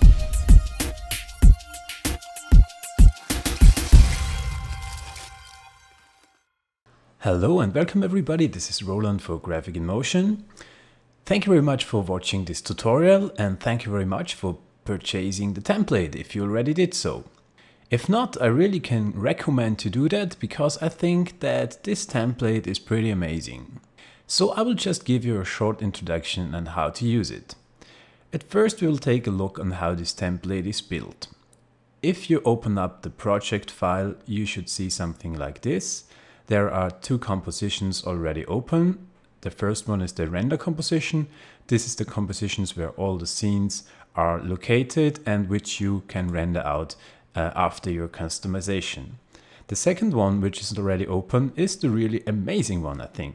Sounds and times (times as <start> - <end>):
Speech: 7.2 - 10.5, 11.3 - 17.3, 17.9 - 27.6, 28.4 - 31.4, 32.0 - 53.3.